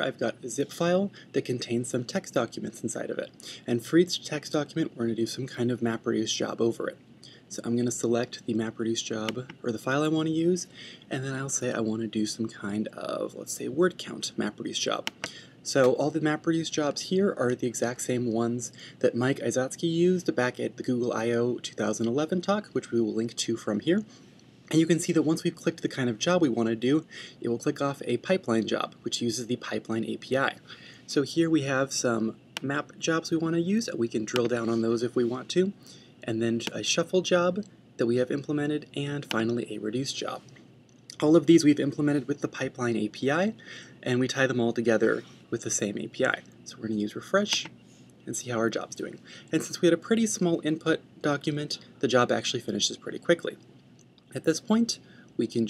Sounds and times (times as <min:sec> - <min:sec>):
Speech: 0:00.0 - 0:24.1, 0:24.7 - 0:40.5, 0:41.1 - 0:53.6, 0:54.3 - 0:55.6.